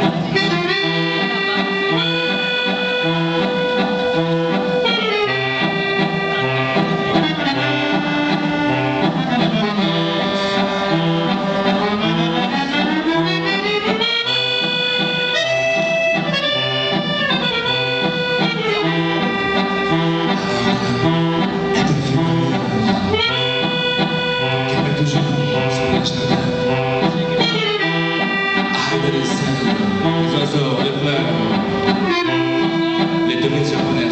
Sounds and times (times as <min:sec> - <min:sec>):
Music: 0:00.0 - 0:34.1.